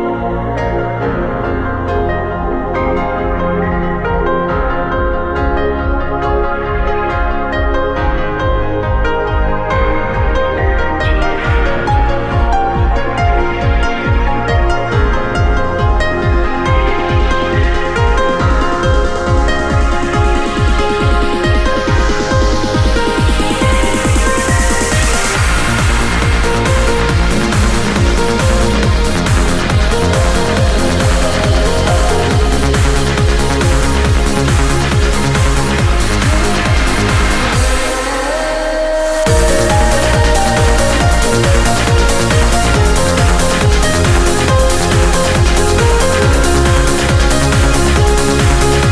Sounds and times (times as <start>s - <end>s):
Techno: 0.0s - 48.9s.